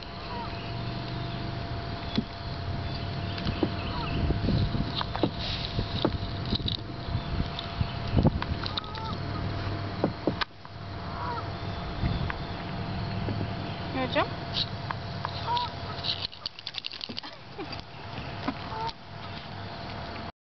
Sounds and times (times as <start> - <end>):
Rowboat, canoe, kayak: 0.0 - 20.3
Speech: 13.9 - 14.3.